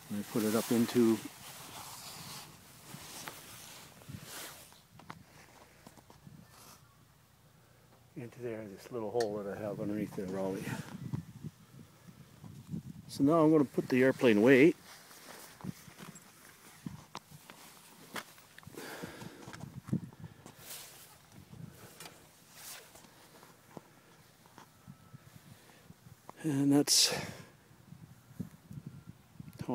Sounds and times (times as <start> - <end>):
Speech: 0.1 - 1.3, 8.2 - 10.9, 13.1 - 14.8, 26.4 - 27.4.